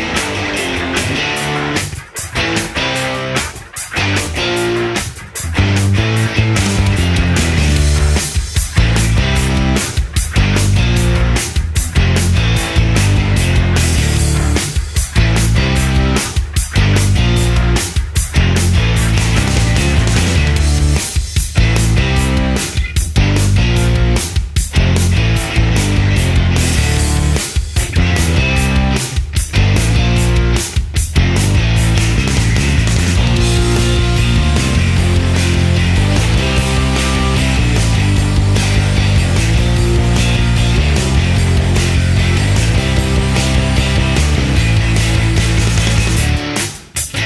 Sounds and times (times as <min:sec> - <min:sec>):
Music: 0:00.0 - 0:47.2.